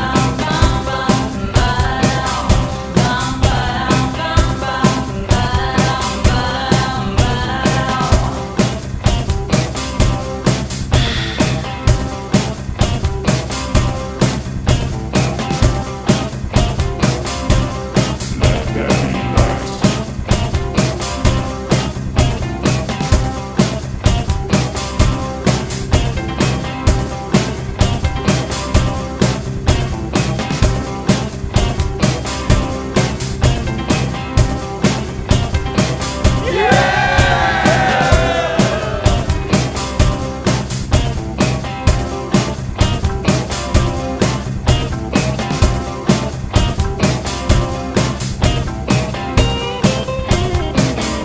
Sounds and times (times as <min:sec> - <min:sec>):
Background music: 0:00.0 - 0:51.2.